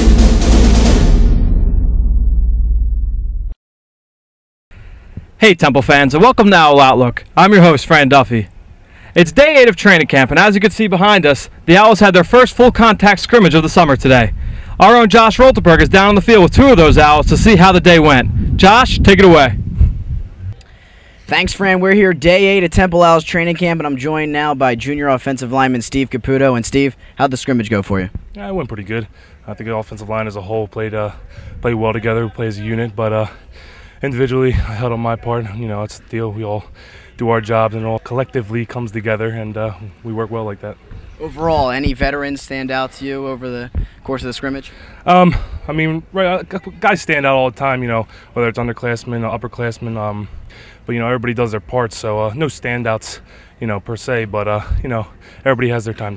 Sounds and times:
Speech: 5.4 - 8.5, 21.3 - 33.4, 50.9 - 56.1.

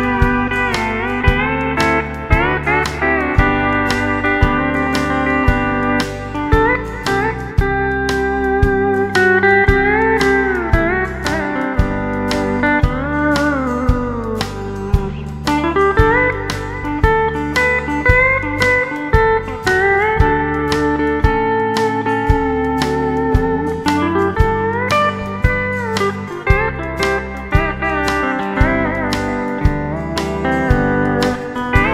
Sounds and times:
Steel guitar, slide guitar: 0.0 - 31.9.

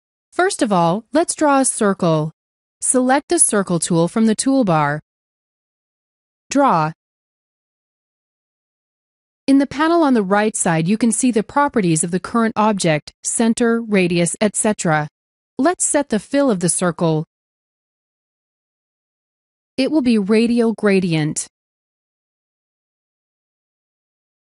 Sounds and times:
Speech: 0.4 - 5.0, 6.5 - 7.0, 9.5 - 17.3, 19.8 - 21.5.

